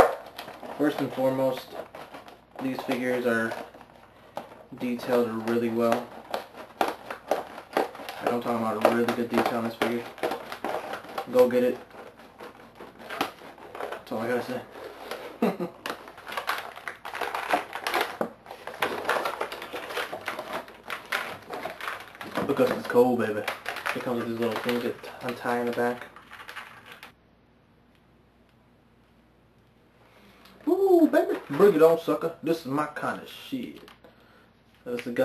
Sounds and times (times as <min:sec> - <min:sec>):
Speech: 0:00.8 - 0:01.8, 0:02.6 - 0:03.6, 0:04.7 - 0:06.1, 0:08.2 - 0:10.1, 0:11.3 - 0:11.8, 0:14.1 - 0:14.7, 0:22.3 - 0:26.1, 0:30.6 - 0:33.9, 0:34.8 - 0:35.2.